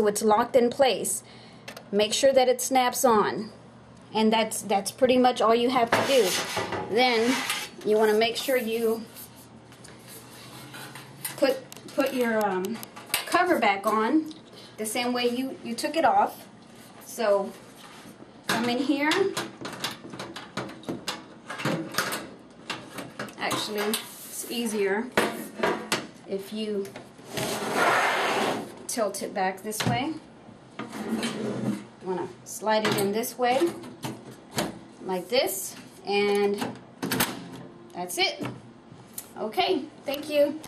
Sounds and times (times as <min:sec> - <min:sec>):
Speech: 0:00.0 - 0:01.2, 0:02.0 - 0:09.1, 0:11.4 - 0:16.5, 0:17.1 - 0:17.6, 0:18.5 - 0:19.4, 0:23.4 - 0:25.1, 0:26.3 - 0:27.0, 0:28.9 - 0:30.2, 0:32.0 - 0:33.8, 0:35.0 - 0:36.7, 0:38.0 - 0:38.5, 0:39.4 - 0:40.6.